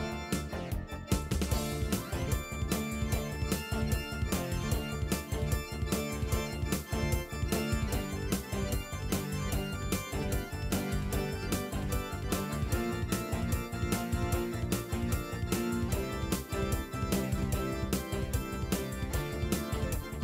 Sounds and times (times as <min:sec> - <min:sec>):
Music: 0:00.0 - 0:20.2.